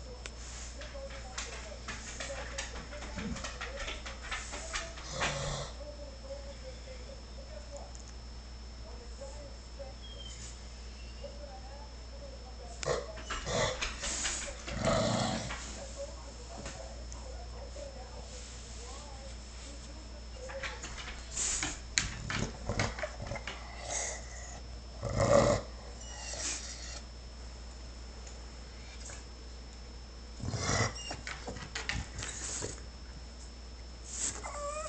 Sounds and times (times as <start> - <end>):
Speech: 0.0 - 8.1, 8.8 - 21.6.